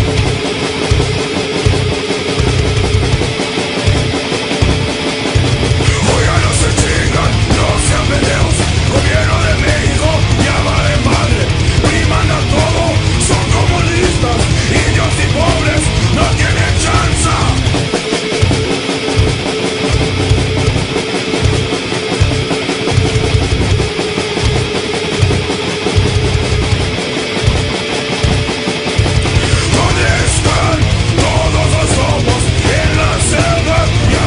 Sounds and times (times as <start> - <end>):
Independent music: 0.0 - 34.2.